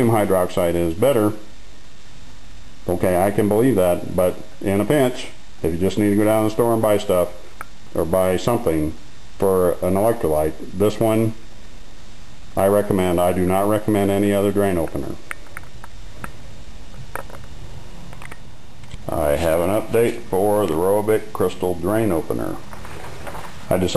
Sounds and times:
Speech: 0.0s - 1.5s, 2.8s - 11.4s, 12.6s - 15.2s, 19.0s - 22.6s, 23.7s - 23.9s
Inside, small room: 0.0s - 23.9s.

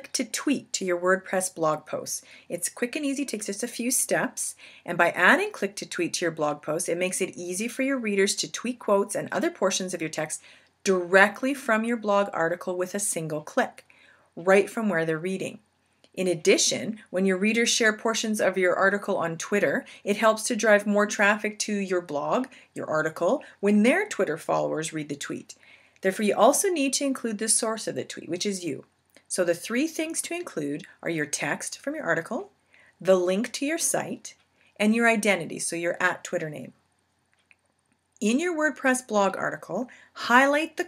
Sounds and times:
Speech: 0.0s - 13.8s, 14.4s - 15.6s, 16.2s - 36.8s, 38.2s - 40.8s.

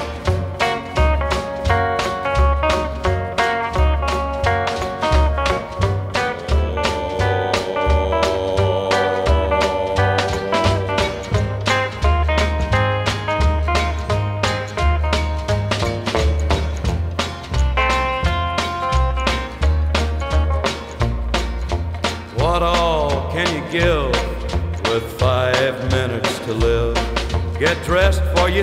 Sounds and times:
Swing music: 0.0s - 28.6s.

